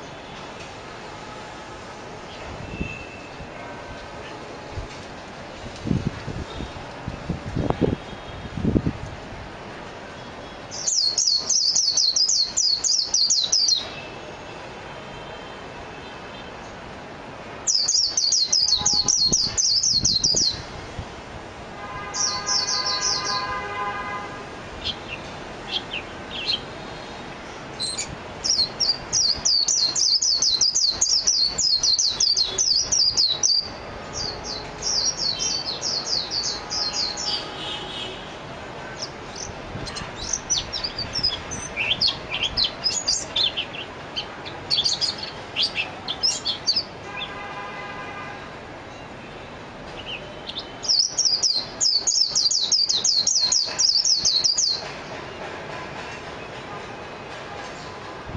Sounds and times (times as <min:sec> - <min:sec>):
Chirp, tweet: 0:17.7 - 0:20.6, 0:50.0 - 0:54.9.